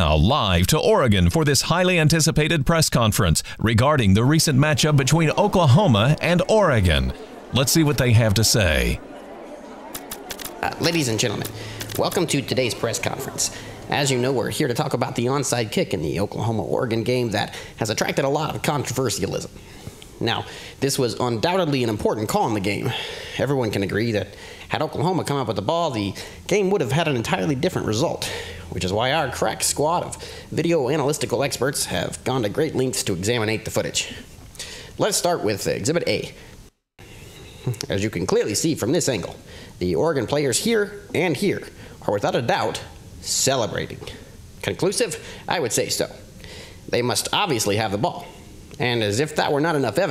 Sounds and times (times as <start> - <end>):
Speech: 0.0 - 9.0, 10.6 - 19.5, 20.2 - 34.2, 35.0 - 36.4, 37.8 - 46.2, 46.9 - 50.1.